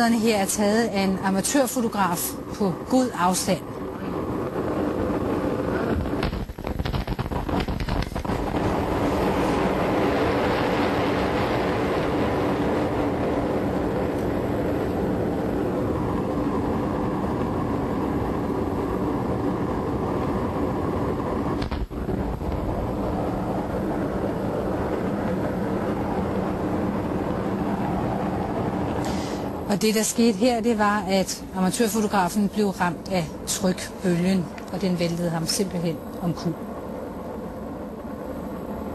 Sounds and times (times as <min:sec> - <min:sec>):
Speech: 0:00.0 - 0:03.6, 0:29.7 - 0:36.6
Eruption: 0:00.0 - 0:38.9.